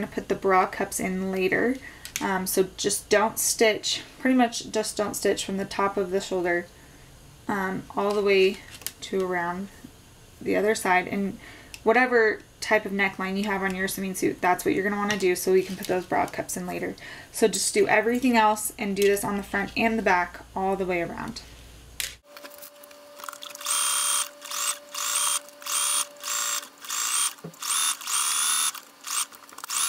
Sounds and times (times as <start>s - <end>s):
Speech: 0.0s - 6.7s, 7.5s - 9.7s, 10.4s - 21.5s
Sewing machine: 23.2s - 29.8s.